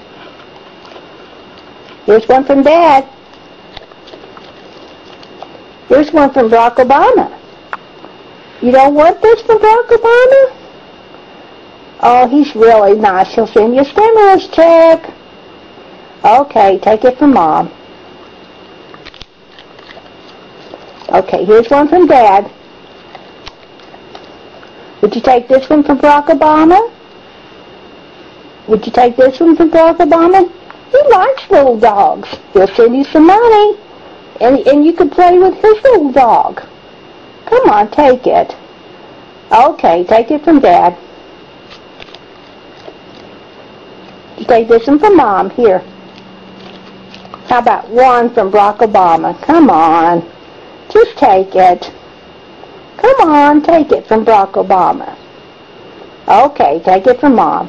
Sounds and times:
Speech: 2.1s - 3.2s, 5.9s - 7.4s, 8.6s - 10.6s, 12.0s - 15.2s, 16.2s - 17.8s, 21.1s - 22.6s, 25.0s - 27.0s, 28.7s - 33.8s, 34.4s - 36.7s, 37.5s - 38.6s, 39.5s - 41.0s, 44.4s - 45.9s, 47.5s - 50.3s, 50.9s - 52.0s, 53.0s - 55.2s, 56.3s - 57.6s.

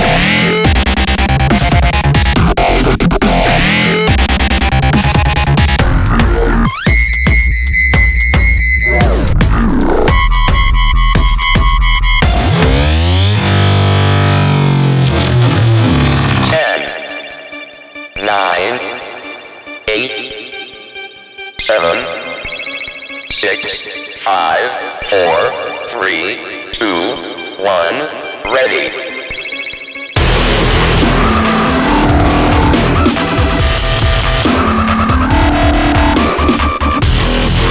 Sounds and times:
Dubstep: 0.0s - 17.2s, 30.1s - 37.7s
Speech: 16.4s - 17.0s, 18.2s - 19.1s, 19.9s - 20.4s, 21.6s - 22.3s, 23.3s - 29.2s.

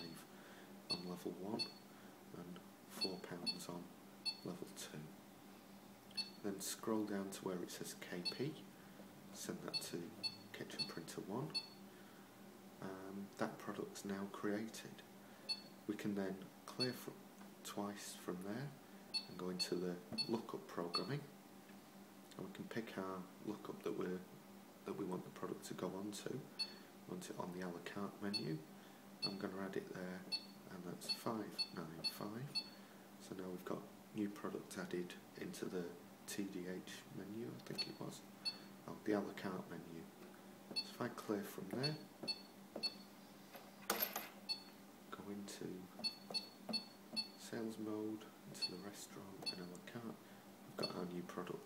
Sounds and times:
Speech: 0.0s - 0.3s, 0.9s - 1.7s, 2.3s - 5.2s, 6.4s - 8.7s, 9.4s - 11.6s, 12.8s - 15.1s, 15.9s - 21.3s, 22.3s - 26.5s, 27.1s - 28.7s, 29.3s - 32.6s, 33.2s - 38.3s, 38.9s - 40.2s, 40.8s - 42.1s, 45.1s - 45.9s, 47.4s - 50.2s, 50.8s - 51.6s.

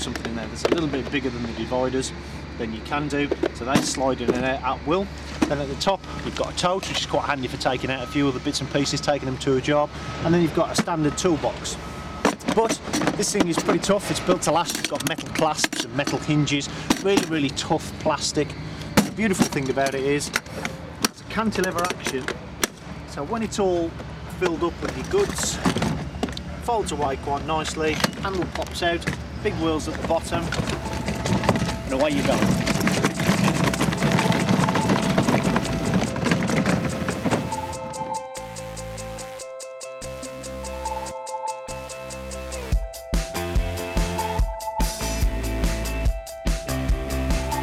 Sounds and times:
Speech: 0.0s - 11.8s, 12.4s - 20.4s, 21.3s - 22.4s, 23.1s - 25.7s, 26.6s - 30.6s, 31.9s - 32.7s.

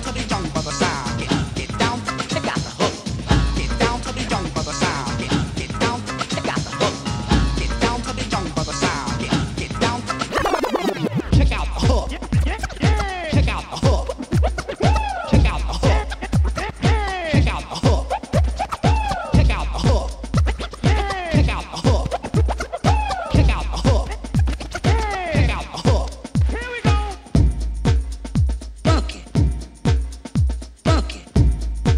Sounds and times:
Electronic music: 0.0s - 31.9s.

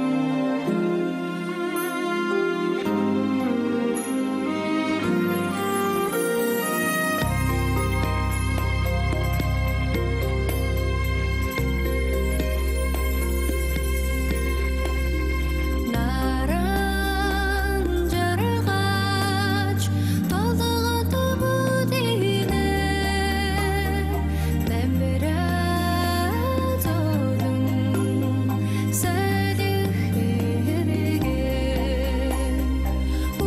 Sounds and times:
Tender music: 0.0s - 33.4s.

